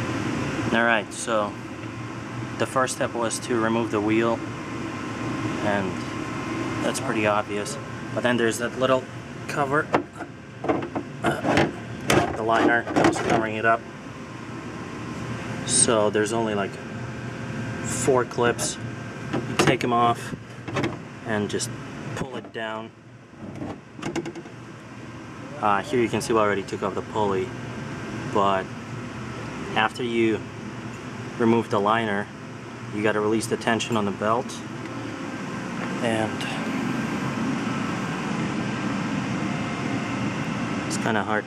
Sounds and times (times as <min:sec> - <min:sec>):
Speech: 0:00.7 - 0:01.6, 0:02.6 - 0:04.4, 0:05.6 - 0:06.0, 0:06.8 - 0:10.0, 0:12.2 - 0:13.8, 0:15.7 - 0:16.8, 0:17.9 - 0:18.8, 0:19.6 - 0:20.4, 0:21.2 - 0:22.9, 0:25.5 - 0:27.5, 0:28.3 - 0:28.7, 0:29.7 - 0:30.4, 0:31.4 - 0:32.3, 0:32.9 - 0:34.7, 0:36.0 - 0:36.6, 0:40.9 - 0:41.4.